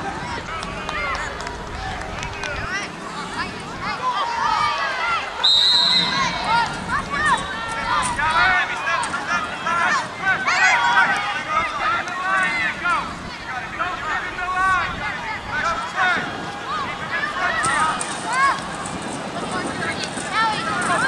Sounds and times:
Speech: 6.0s - 21.0s.

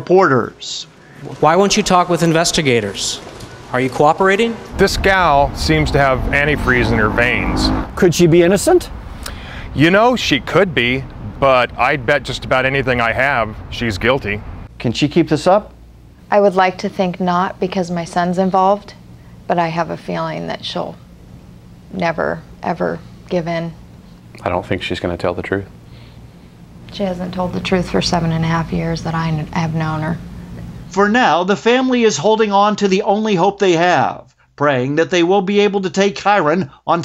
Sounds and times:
Speech: 0.0s - 8.9s, 9.8s - 21.0s, 24.4s - 25.7s, 30.9s - 37.0s.

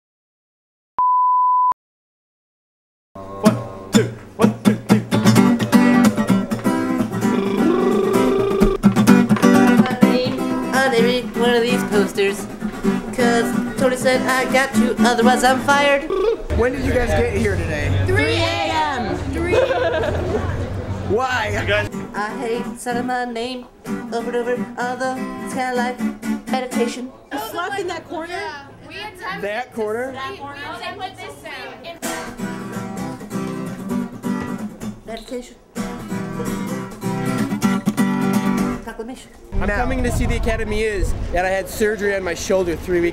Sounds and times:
Beep, bleep: 1.0s - 1.8s
Music: 3.2s - 15.8s, 21.8s - 27.0s, 32.0s - 35.1s, 35.7s - 38.8s.

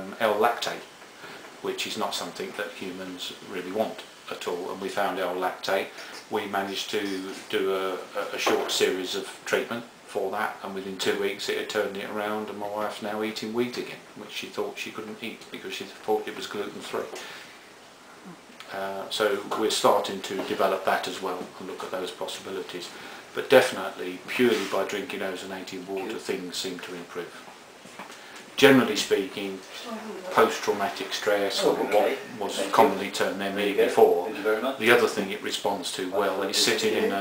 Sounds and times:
Speech: 0.0s - 0.9s, 1.6s - 17.3s, 18.2s - 27.5s, 28.6s - 37.2s.

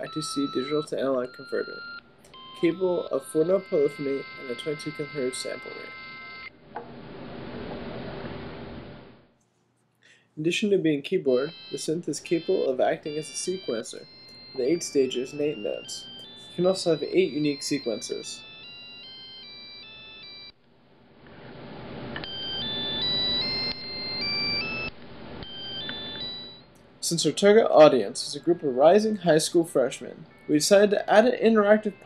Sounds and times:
Speech: 0.0s - 1.8s, 2.6s - 5.9s, 10.4s - 18.4s, 27.0s - 32.0s.

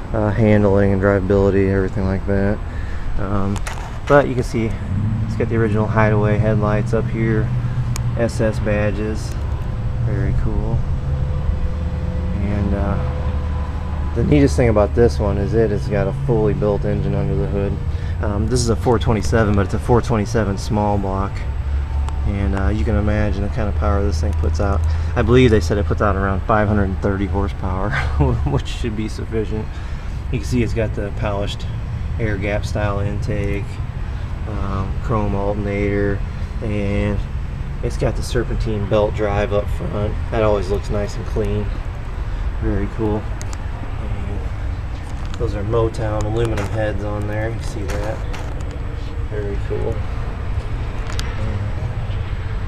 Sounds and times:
Speech: 0.1s - 2.6s, 3.2s - 7.6s, 8.2s - 9.4s, 10.0s - 10.8s, 12.4s - 13.2s, 14.2s - 21.5s, 22.2s - 33.8s, 34.5s - 41.8s, 42.6s - 43.3s, 44.0s - 44.5s, 45.4s - 48.3s, 49.3s - 50.0s, 51.4s - 51.9s.

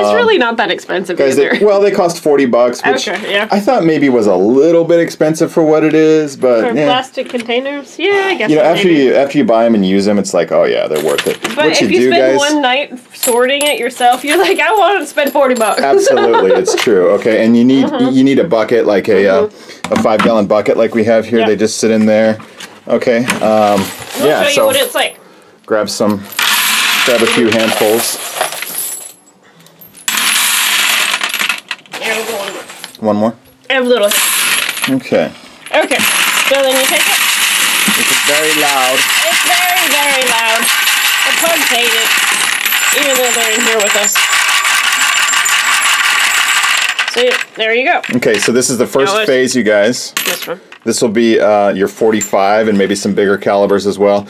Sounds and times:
Inside, small room: 0.0s - 54.2s.

